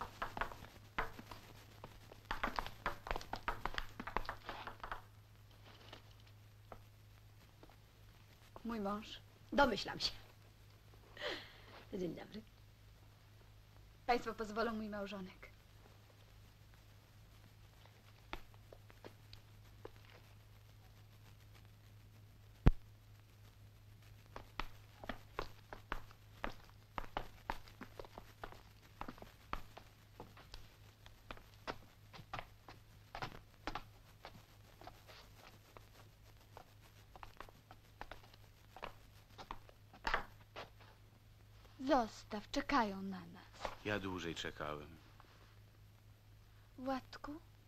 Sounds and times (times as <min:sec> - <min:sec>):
Speech: 0:08.6 - 0:10.3, 0:11.9 - 0:12.5, 0:14.1 - 0:15.5, 0:41.8 - 0:45.0, 0:46.8 - 0:47.5.